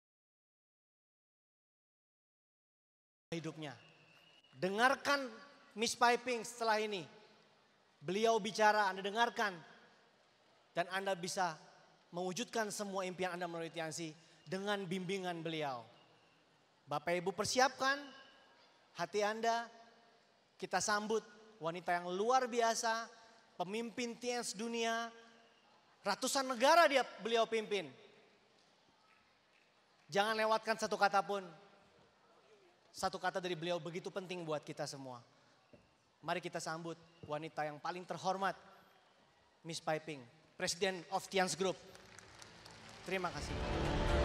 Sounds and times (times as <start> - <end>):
Male speech, man speaking: 3.3 - 3.8, 4.6 - 7.2, 8.0 - 9.7, 10.8 - 15.9, 16.9 - 18.3, 19.0 - 19.8, 20.6 - 25.2, 26.0 - 28.0, 30.1 - 31.6, 32.9 - 35.3, 36.3 - 38.6, 39.6 - 41.8, 43.1 - 43.6
Narration, monologue: 3.3 - 28.8, 30.0 - 32.2, 32.8 - 39.0, 39.6 - 42.1, 42.9 - 43.6.